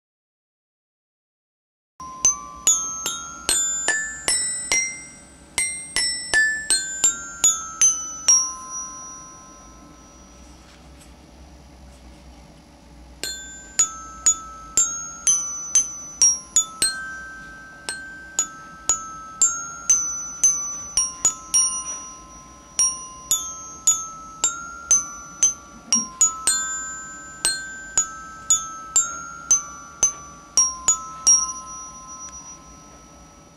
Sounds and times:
Marimba, xylophone: 2.0 - 10.6, 13.2 - 33.5
Glockenspiel: 2.0 - 11.8, 13.2 - 33.5.

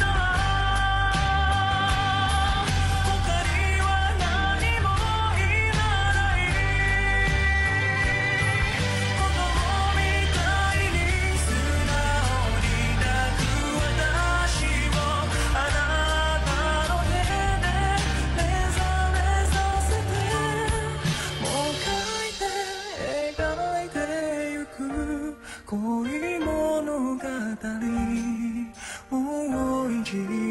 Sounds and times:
Music of Asia: 0.0 - 30.5
Singing: 0.0 - 30.5.

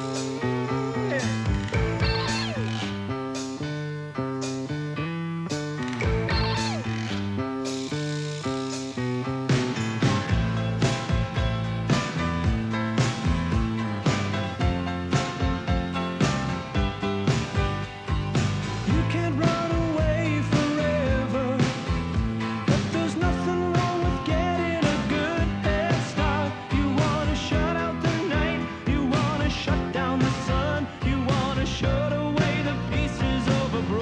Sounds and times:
Rock and roll: 0.0 - 34.0.

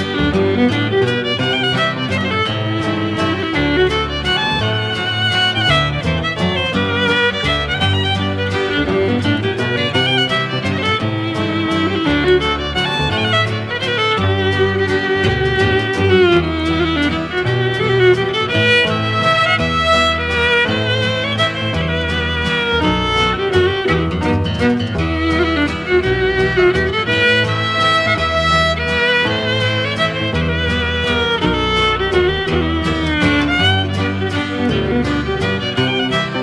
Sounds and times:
Violin, fiddle: 0.0 - 36.4.

